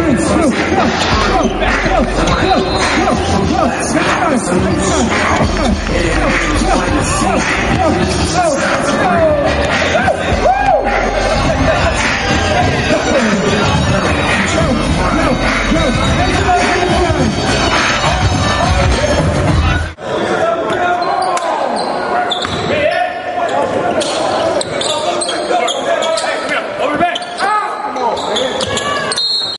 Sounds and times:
Speech: 11.4 - 17.4, 20.2 - 29.2.

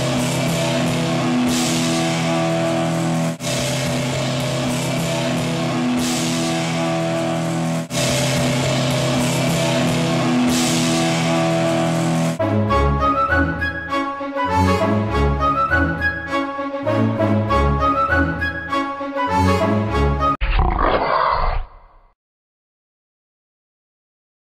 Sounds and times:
Music: 0.0 - 20.4.

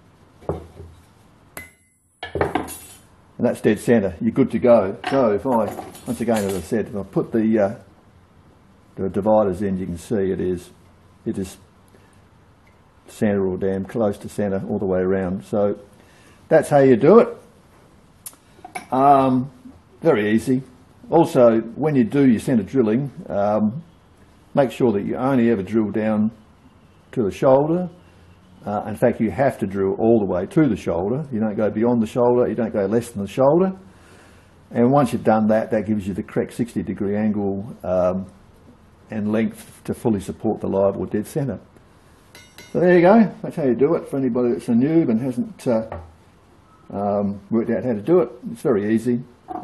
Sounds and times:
Speech: 3.4 - 7.9, 9.0 - 11.7, 13.1 - 15.9, 16.5 - 17.5, 18.9 - 23.9, 24.6 - 26.4, 27.1 - 28.0, 28.6 - 33.9, 34.7 - 38.4, 39.1 - 41.7, 42.7 - 46.0, 46.9 - 49.4.

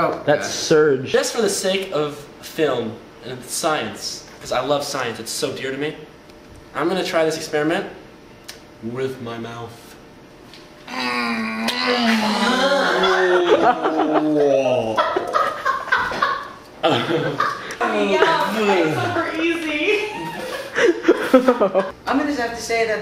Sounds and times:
Inside, small room: 0.0 - 23.0.

